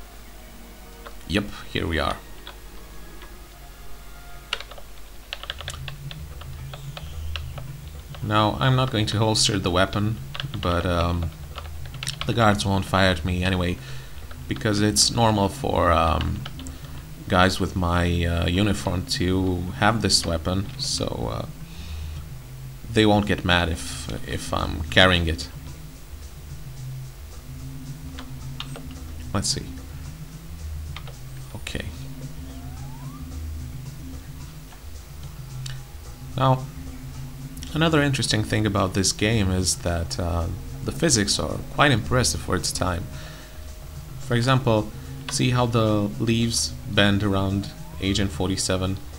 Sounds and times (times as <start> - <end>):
Typing: 4.5 - 8.2.